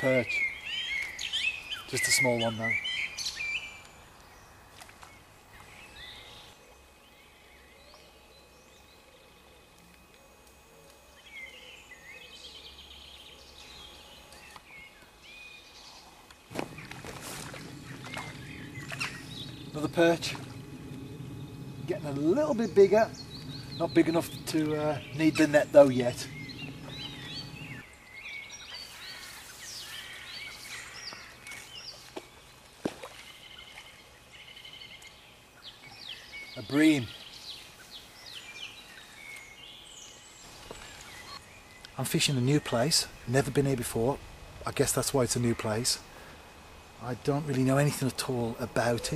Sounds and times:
Chirp, tweet: 0.1 - 9.4, 11.2 - 16.1, 17.7 - 20.3, 22.2 - 32.5, 33.2 - 43.3.

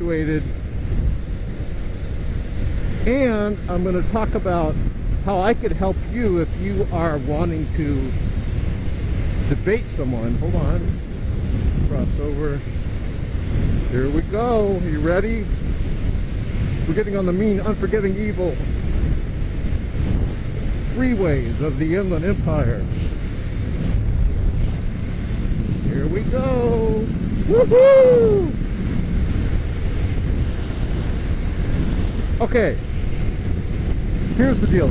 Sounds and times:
Speech: 0.0 - 0.4, 3.1 - 8.1, 9.5 - 11.0, 11.9 - 12.6, 13.9 - 15.5, 16.9 - 18.6, 20.9 - 22.9, 25.9 - 27.1, 32.4 - 32.8, 34.4 - 34.9
Vehicle: 0.0 - 34.9.

